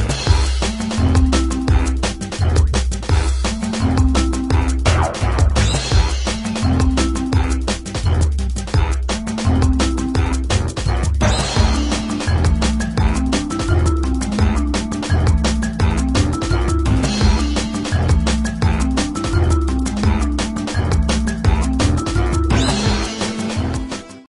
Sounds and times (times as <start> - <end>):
Music: 0.0 - 24.3.